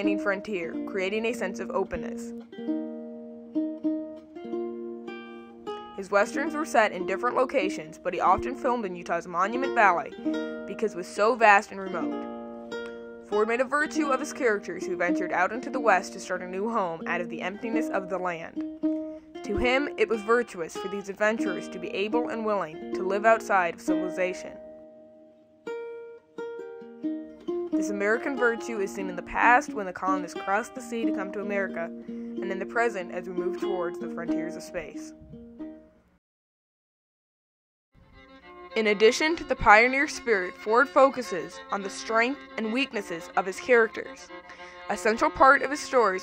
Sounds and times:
Speech: 0.0s - 2.3s, 6.0s - 12.1s, 13.4s - 18.6s, 19.4s - 24.6s, 27.8s - 35.2s, 38.8s - 44.3s, 44.9s - 46.2s
Ukulele: 0.0s - 35.9s, 39.0s - 44.0s, 44.8s - 46.2s.

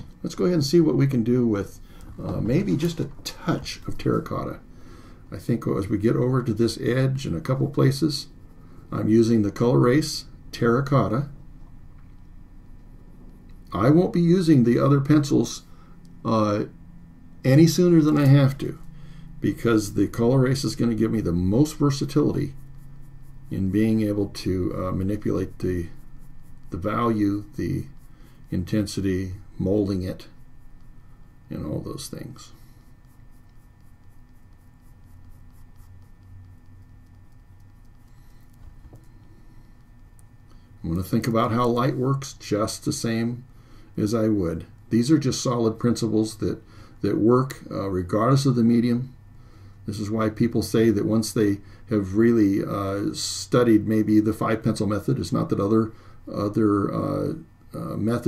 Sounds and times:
Speech: 0.2s - 4.6s, 5.3s - 11.4s, 13.7s - 16.8s, 17.4s - 18.8s, 19.4s - 22.6s, 23.5s - 26.0s, 26.7s - 30.4s, 31.5s - 32.6s, 40.8s - 49.2s, 49.8s - 58.2s.

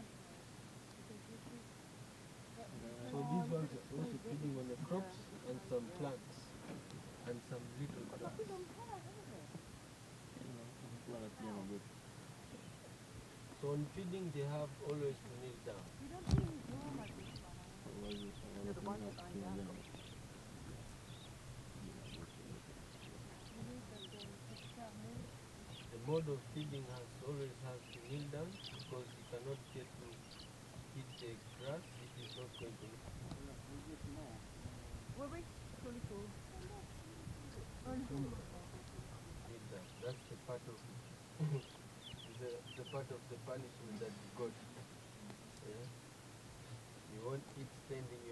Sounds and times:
Speech: 1.0s - 1.6s, 2.6s - 6.5s, 7.2s - 9.5s, 10.4s - 11.8s, 13.6s - 20.0s, 23.4s - 25.3s, 25.9s - 30.2s, 31.0s - 34.4s, 35.2s - 44.8s, 47.1s - 48.3s.

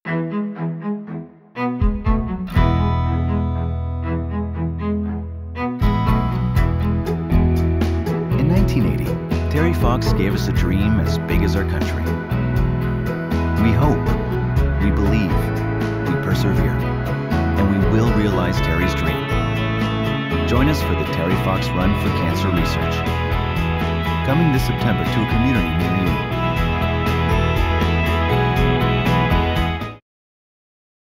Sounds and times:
Music: 0.0s - 30.0s
Speech: 8.3s - 12.1s, 13.6s - 14.2s, 14.8s - 15.5s, 16.1s - 16.8s, 17.6s - 19.3s, 20.5s - 23.1s, 24.2s - 26.3s.

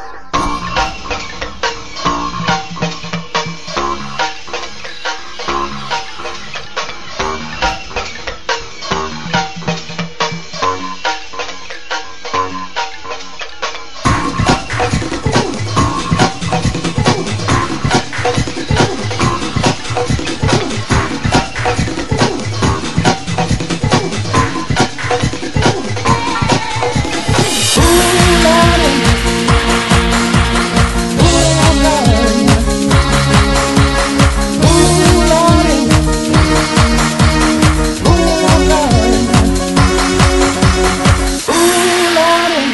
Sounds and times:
Blues: 13.6s - 42.7s
Techno: 13.8s - 42.7s.

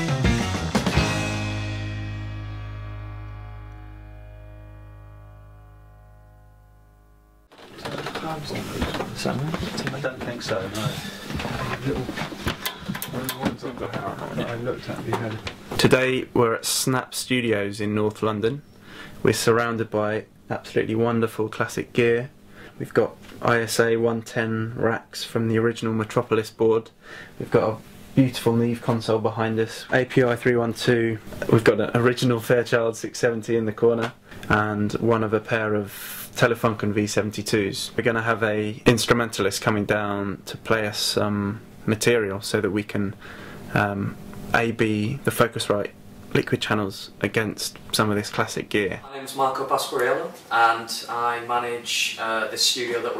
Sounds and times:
Speech: 7.8s - 12.2s, 13.0s - 18.6s, 19.2s - 53.2s.

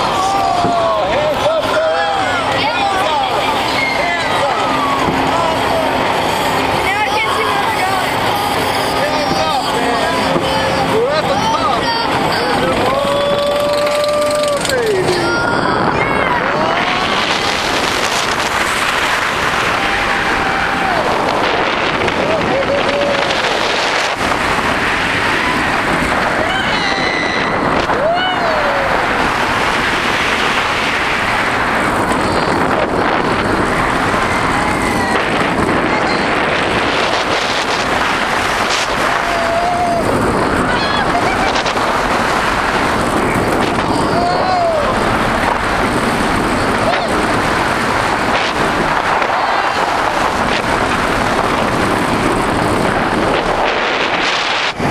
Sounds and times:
Outside, urban or manmade: 0.0s - 54.9s.

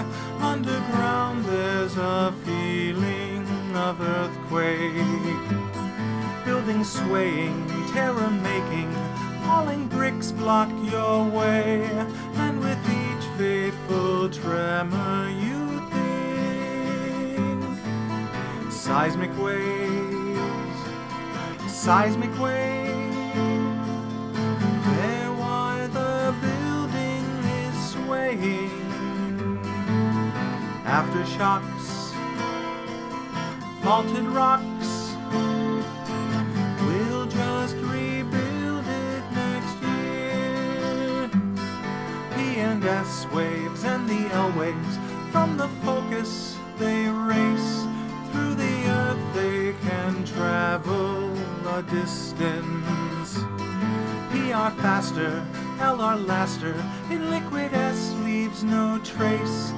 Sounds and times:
Music: 0.0s - 59.7s.

